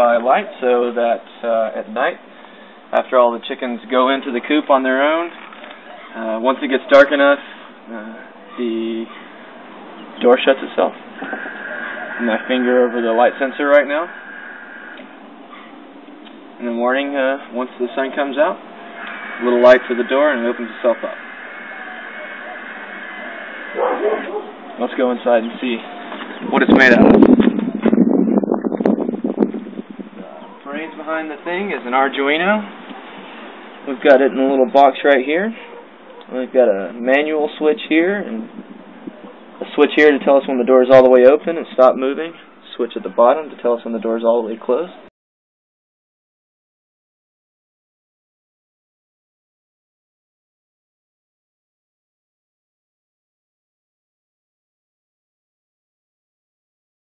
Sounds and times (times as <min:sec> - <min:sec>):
Speech: 0:00.0 - 0:02.2, 0:02.9 - 0:05.3, 0:06.1 - 0:09.1, 0:10.2 - 0:11.0, 0:12.2 - 0:14.1, 0:16.6 - 0:18.6, 0:19.4 - 0:21.2, 0:24.8 - 0:27.2, 0:30.2 - 0:32.7, 0:33.9 - 0:35.6, 0:36.3 - 0:38.6, 0:39.6 - 0:45.1.